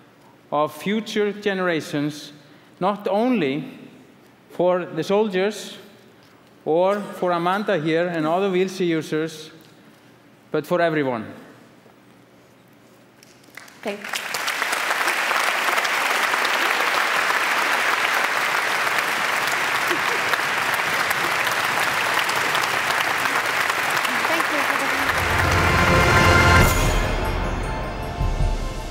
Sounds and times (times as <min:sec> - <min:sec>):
Applause: 0:13.2 - 0:27.0.